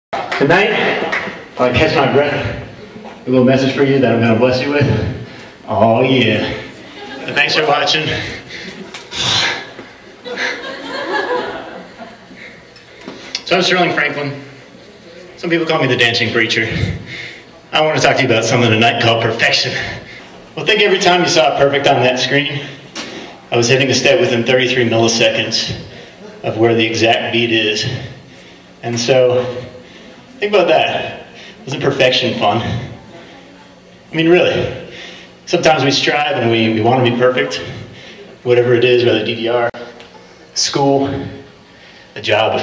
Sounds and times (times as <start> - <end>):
Male speech, man speaking: 0.4 - 6.7, 7.3 - 8.4, 13.4 - 14.5, 15.4 - 17.0, 17.7 - 20.0, 20.6 - 22.8, 23.5 - 28.2, 28.8 - 29.8, 30.4 - 32.9, 34.1 - 34.9, 35.5 - 39.9, 40.6 - 41.5, 42.2 - 42.6.